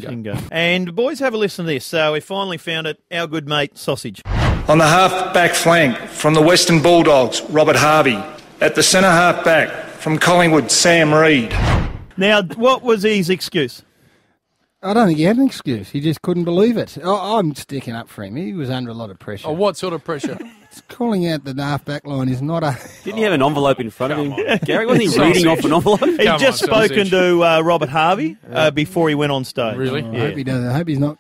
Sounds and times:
Male speech, man speaking: 0.0 - 11.6, 12.2 - 13.8, 14.8 - 31.2
Narration, monologue: 0.0 - 31.2.

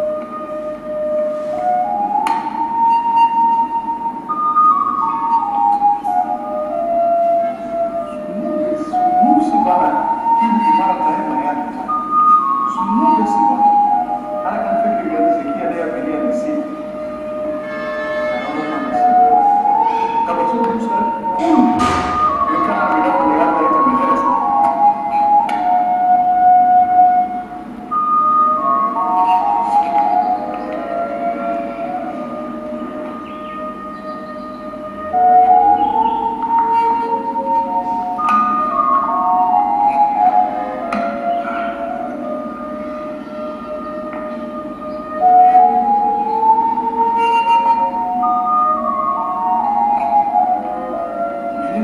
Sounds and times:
Music: 0.0 - 51.8
Speech: 8.3 - 11.9, 12.7 - 13.7, 14.4 - 16.8, 18.4 - 24.4.

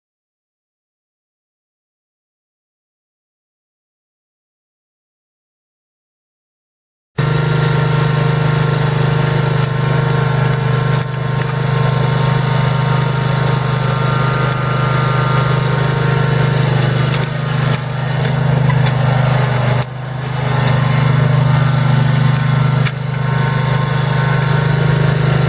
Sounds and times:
Lawn mower: 7.2 - 25.4.

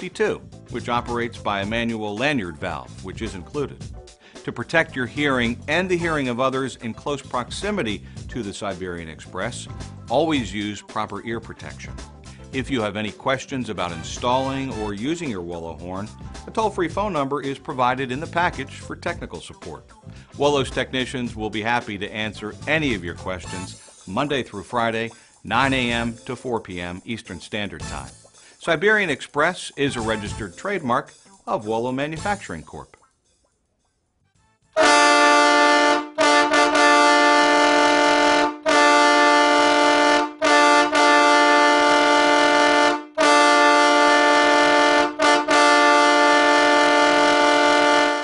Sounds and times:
Train horn: 34.8 - 48.2
Vehicle horn, car horn, honking: 34.8 - 48.2.

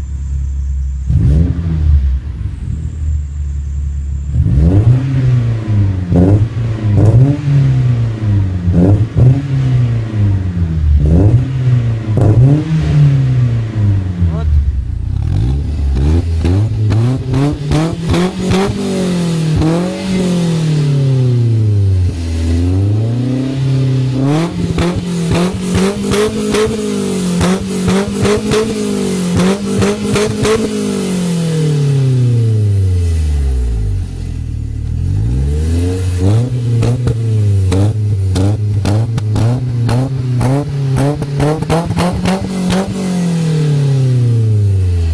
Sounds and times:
Speech: 14.3 - 14.6.

